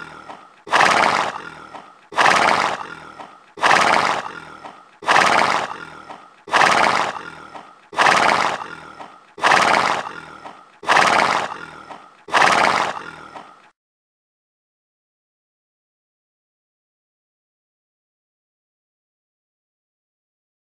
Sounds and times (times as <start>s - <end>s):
Neigh, whinny: 0.0s - 13.7s
Snort: 0.0s - 13.8s
Sound effect: 0.0s - 13.8s.